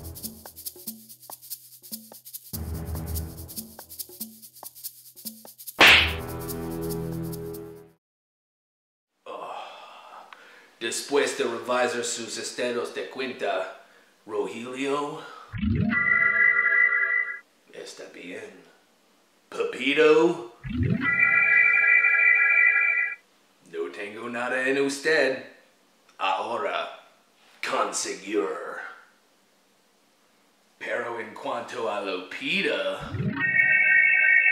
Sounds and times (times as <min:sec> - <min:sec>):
Music: 0:00.0 - 0:08.0
Speech: 0:10.8 - 0:15.3, 0:17.7 - 0:18.8, 0:19.5 - 0:20.6, 0:23.7 - 0:25.6, 0:26.2 - 0:29.1, 0:30.8 - 0:33.1.